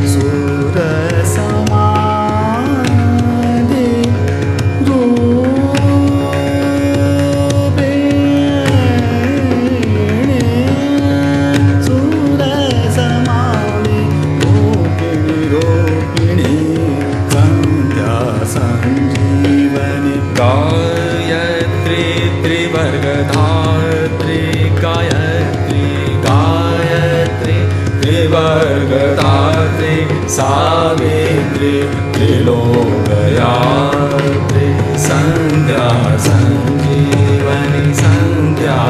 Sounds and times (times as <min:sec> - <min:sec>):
Musical instrument: 0:00.0 - 0:23.2
Carnatic music: 0:00.0 - 0:38.8
Mantra: 0:14.6 - 0:38.8.